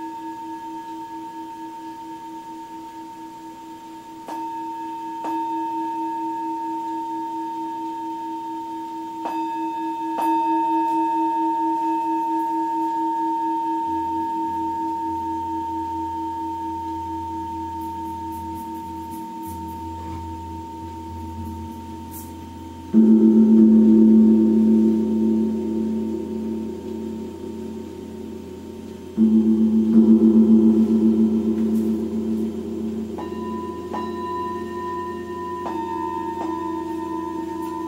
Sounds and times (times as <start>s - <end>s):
Gong: 0.0s - 37.8s.